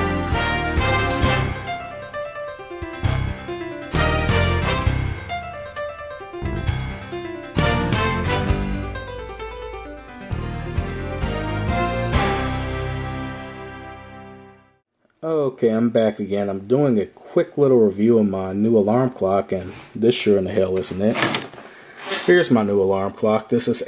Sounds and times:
Electric piano: 1.0 - 13.7.

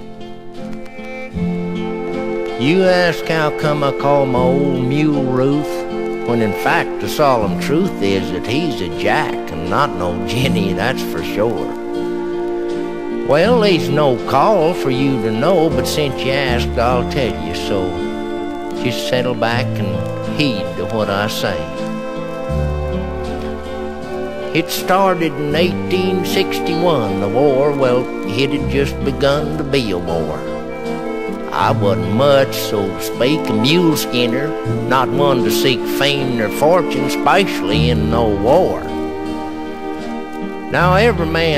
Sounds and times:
Music: 0.0 - 41.5
Speech: 2.6 - 11.8, 13.3 - 18.0, 18.8 - 21.7, 24.5 - 30.5, 31.5 - 38.9, 40.7 - 41.5.

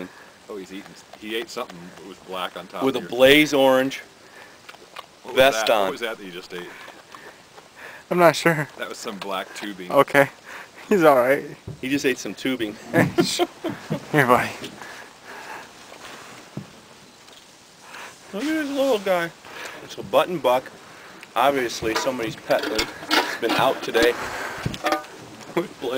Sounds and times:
Speech: 5.3 - 6.7, 18.3 - 20.7, 21.4 - 24.2, 25.6 - 25.9.

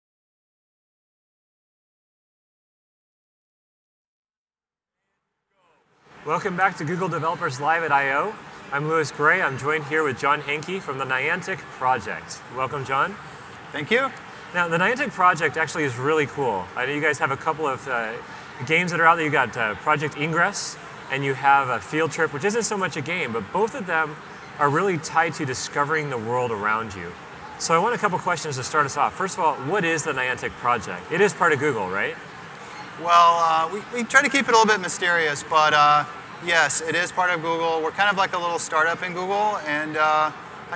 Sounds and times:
Inside, public space: 5.0 - 40.7
Speech: 5.6 - 32.2, 33.0 - 40.7.

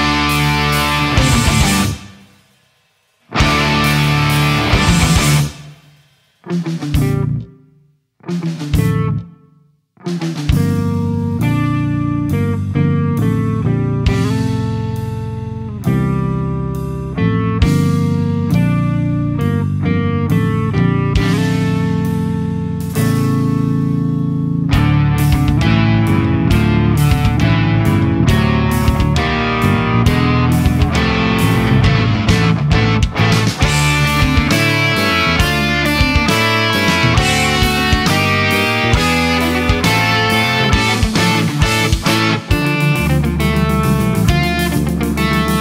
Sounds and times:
Electric guitar: 0.0 - 2.5, 3.2 - 7.6, 8.2 - 45.6.

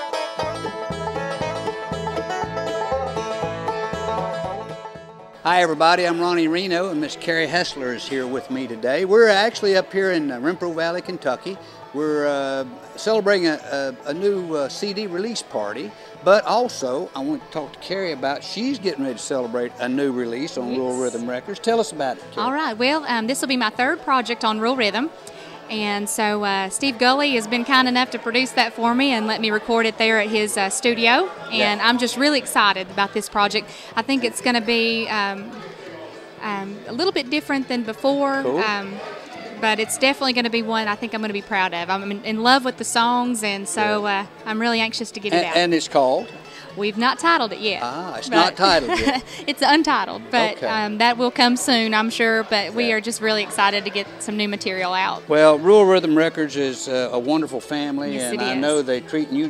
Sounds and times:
Music: 0.0 - 59.4.

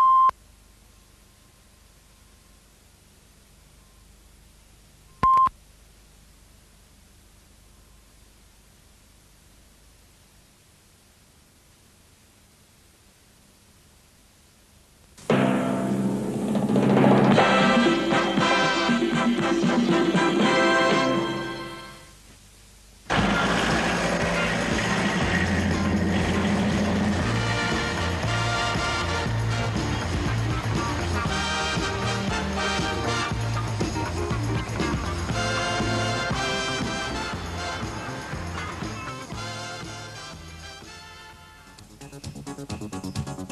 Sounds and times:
Television: 14.0 - 43.4
Music: 15.2 - 22.2, 23.1 - 43.5.

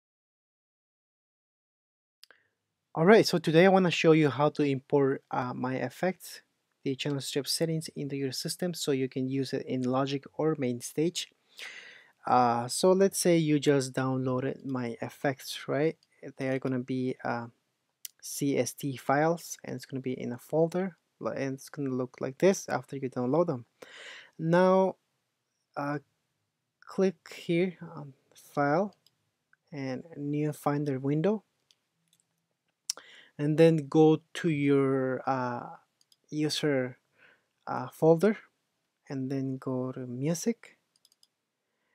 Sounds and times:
Speech: 3.0 - 11.3, 12.2 - 17.5, 18.1 - 23.7, 24.4 - 25.0, 25.8 - 26.0, 26.9 - 29.0, 29.8 - 31.4, 32.9 - 37.0, 37.7 - 38.5, 39.1 - 40.8.

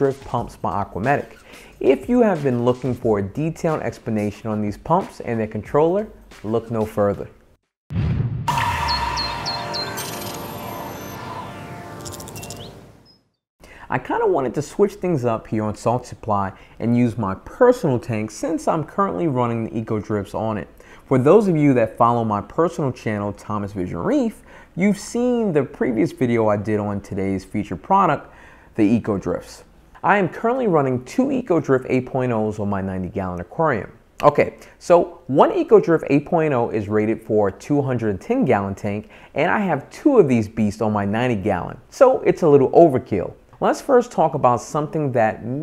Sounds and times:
Speech: 0.0 - 7.4, 13.8 - 45.6.

